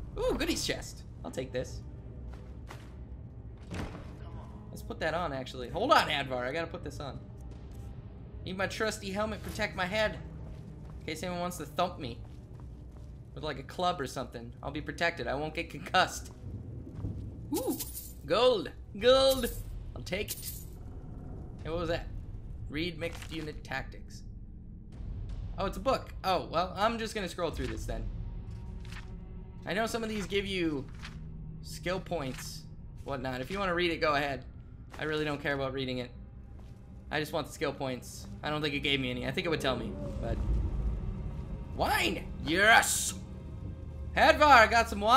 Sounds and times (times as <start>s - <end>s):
Speech: 0.2s - 1.8s, 4.2s - 7.2s, 8.5s - 10.2s, 13.4s - 16.3s, 17.6s - 20.4s, 21.6s - 22.1s, 22.7s - 24.2s, 25.6s - 28.1s, 29.7s - 30.8s, 31.7s - 34.4s, 35.0s - 36.1s, 37.1s - 40.4s, 41.8s - 43.2s, 44.2s - 45.1s.